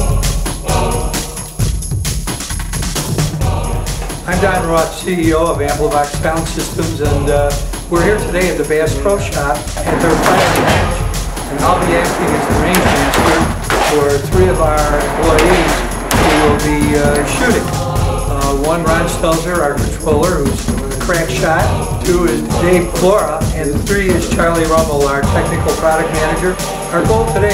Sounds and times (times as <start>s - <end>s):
Music: 0.0s - 27.5s
Speech: 4.2s - 10.9s, 11.5s - 17.7s, 18.3s - 27.5s.